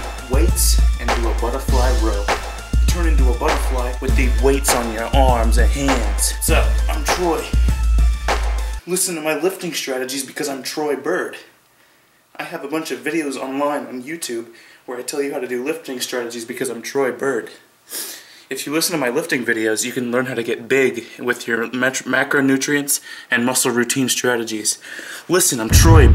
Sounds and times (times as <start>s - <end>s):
Speech: 0.0s - 2.3s, 2.9s - 7.6s, 8.8s - 11.6s, 12.4s - 17.6s, 18.5s - 26.1s.